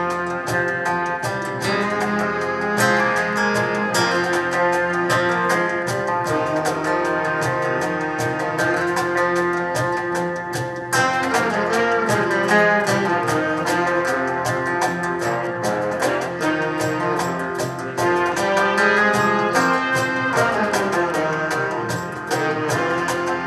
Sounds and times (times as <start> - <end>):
Folk music: 0.0 - 23.4.